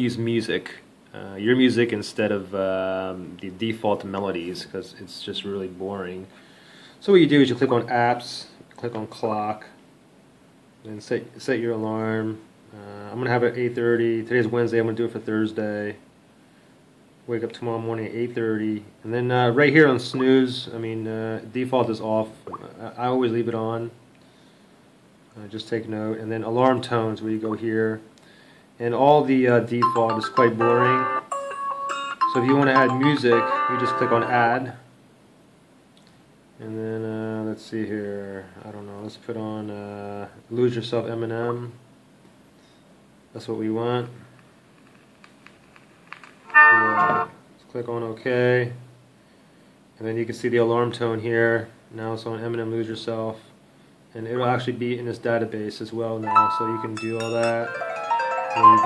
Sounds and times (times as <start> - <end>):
Speech: 0.0 - 6.3, 7.0 - 9.8, 10.8 - 16.0, 17.3 - 24.0, 25.3 - 28.1, 28.8 - 31.1, 32.3 - 34.9, 36.6 - 41.8, 43.3 - 44.3, 46.7 - 48.9, 50.0 - 57.7, 58.6 - 58.8.